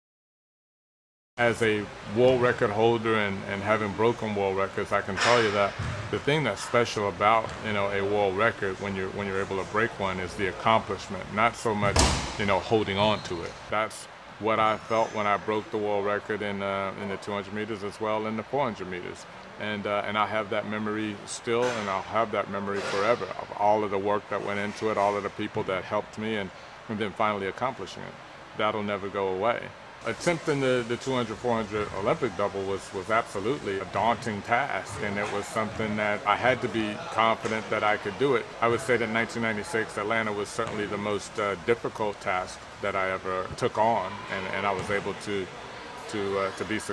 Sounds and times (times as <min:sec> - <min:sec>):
Male speech, man speaking: 0:01.4 - 0:46.9.